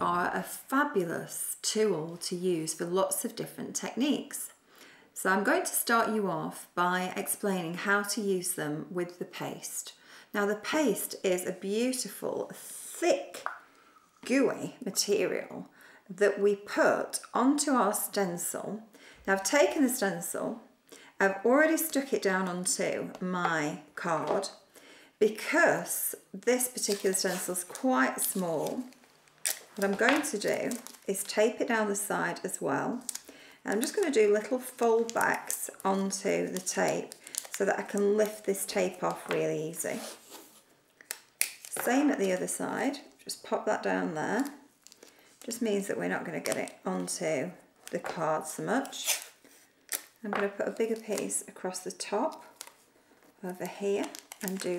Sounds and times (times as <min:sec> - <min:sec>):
Speech: 0:00.0 - 0:04.6, 0:05.2 - 0:13.5, 0:14.3 - 0:20.6, 0:21.2 - 0:24.6, 0:25.2 - 0:28.9, 0:29.8 - 0:33.1, 0:33.7 - 0:40.1, 0:41.8 - 0:44.6, 0:45.5 - 0:49.2, 0:50.2 - 0:52.4, 0:53.4 - 0:54.7.